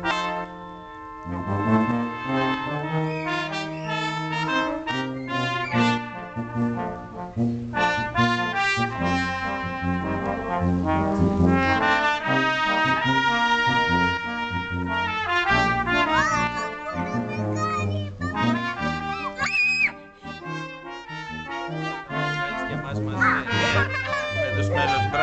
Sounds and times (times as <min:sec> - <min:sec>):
Music: 0:00.0 - 0:25.2
Speech: 0:16.1 - 0:18.6, 0:22.6 - 0:25.2.